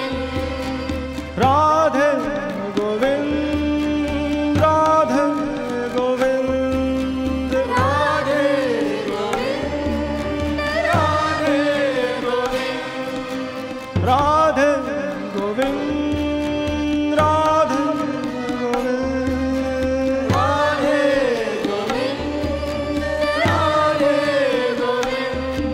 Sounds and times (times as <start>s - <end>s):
Carnatic music: 0.0s - 25.7s
Singing: 0.0s - 25.7s.